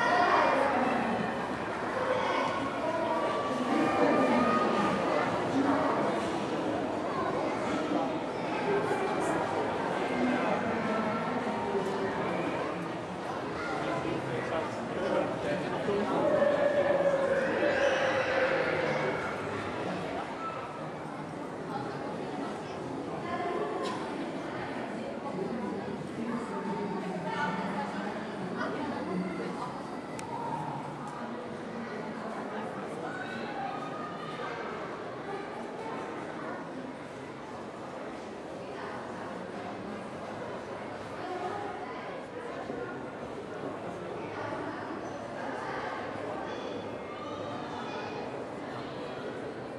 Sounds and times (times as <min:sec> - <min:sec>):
Speech: 0:00.0 - 0:49.7.